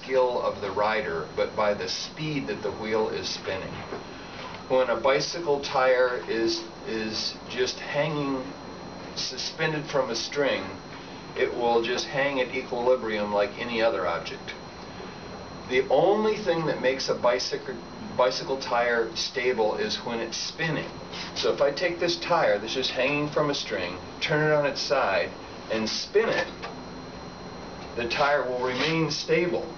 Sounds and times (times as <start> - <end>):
Speech: 0.0 - 3.9, 4.7 - 8.6, 9.2 - 10.8, 11.4 - 14.6, 15.7 - 26.6, 28.0 - 29.7.